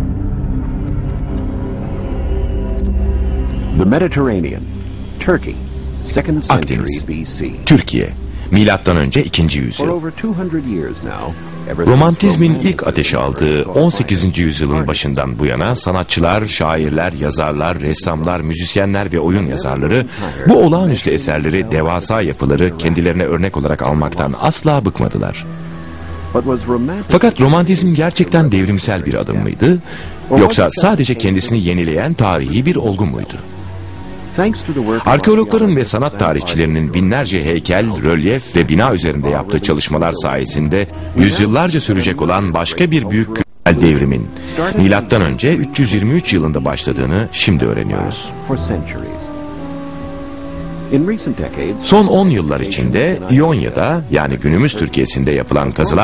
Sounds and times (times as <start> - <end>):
Music: 0.0 - 56.0
Speech: 3.8 - 4.6, 5.2 - 25.5, 26.4 - 33.4, 34.4 - 49.3, 50.9 - 56.0.